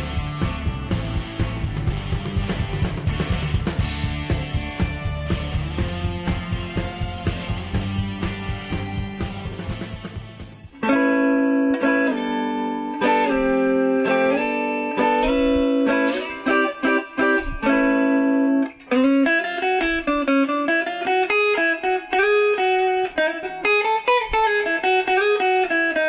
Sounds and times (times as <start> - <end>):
Strum: 0.0 - 20.6
Electric guitar: 0.0 - 26.0.